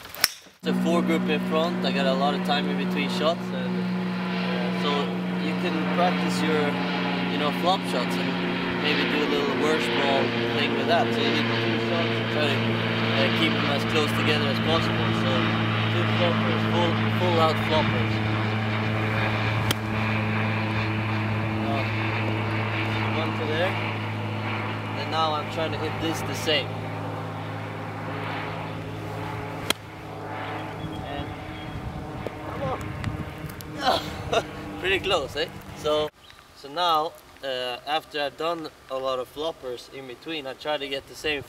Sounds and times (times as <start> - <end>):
Speech: 0.6 - 3.8, 4.4 - 12.6, 13.2 - 18.2, 21.6 - 21.9, 23.1 - 23.8, 25.0 - 26.7, 31.0 - 31.4, 33.8 - 41.4.